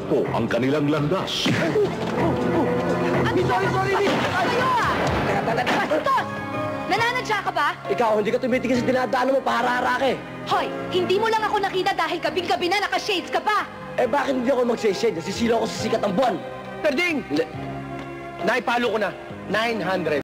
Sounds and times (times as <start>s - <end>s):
Music: 0.0s - 20.2s.